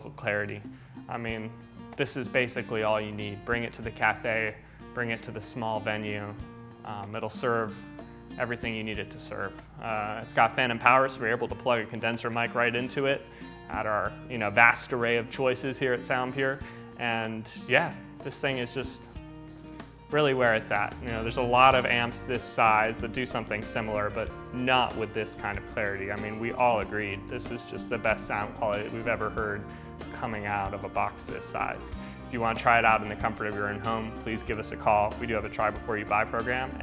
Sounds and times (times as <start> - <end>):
Speech: 0.0 - 7.8, 8.4 - 19.1, 20.1 - 36.8
Acoustic guitar: 0.0 - 36.8.